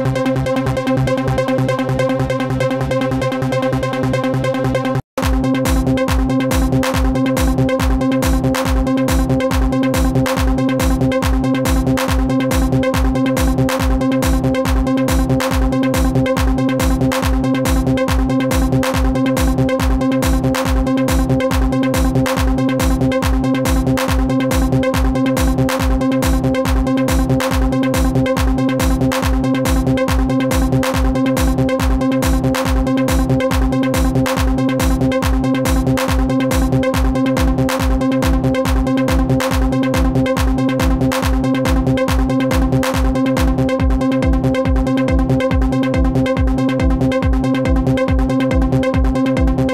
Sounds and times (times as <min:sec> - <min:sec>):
Electronic dance music: 0:00.0 - 0:49.7
Electronica: 0:00.0 - 0:49.7
Techno: 0:00.0 - 0:49.7
Trance music: 0:00.0 - 0:49.7.